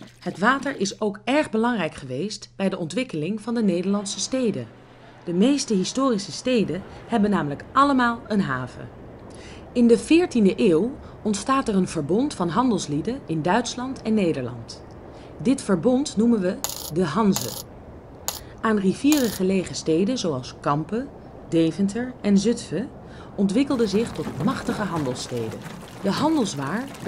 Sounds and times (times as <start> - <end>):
Speech: 0.2 - 8.9, 9.8 - 14.8, 15.4 - 17.6, 18.6 - 27.0.